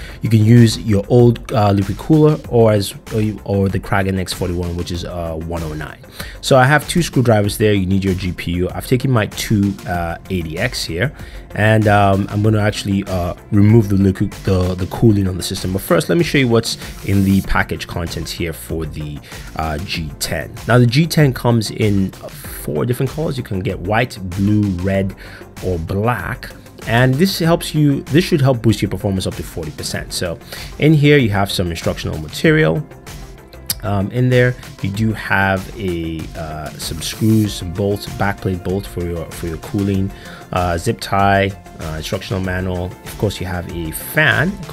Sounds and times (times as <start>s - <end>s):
Music: 0.0s - 44.7s
Speech: 0.2s - 32.8s, 33.7s - 44.7s.